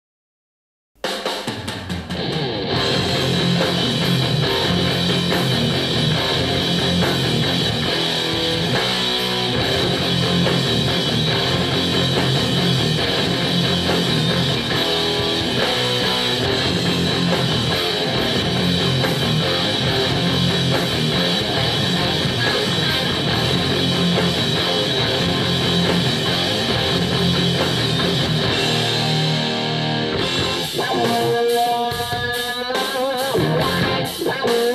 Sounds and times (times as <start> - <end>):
Guitar: 1.2 - 34.7.